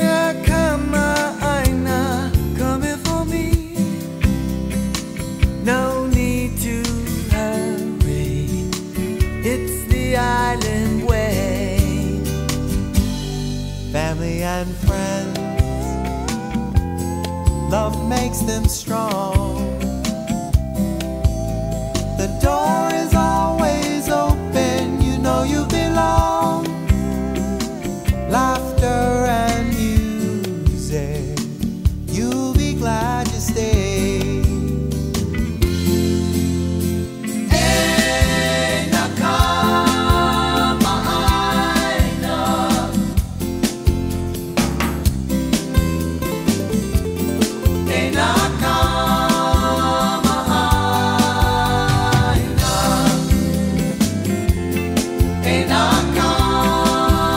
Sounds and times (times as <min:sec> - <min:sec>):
Music: 0:00.0 - 0:57.3.